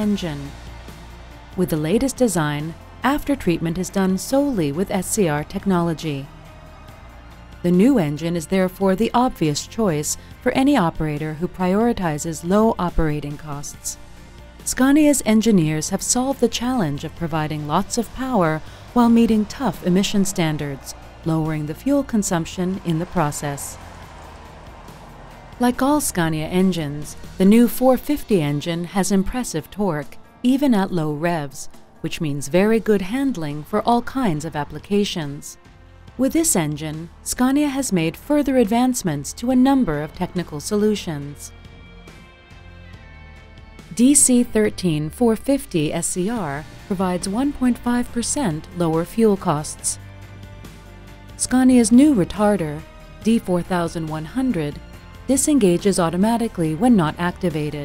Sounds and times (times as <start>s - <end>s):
Speech: 0.0s - 0.5s, 1.6s - 6.3s, 7.6s - 14.0s, 14.7s - 23.8s, 25.6s - 35.6s, 36.2s - 41.5s, 43.9s - 50.0s, 51.4s - 57.8s
Music: 0.0s - 57.8s.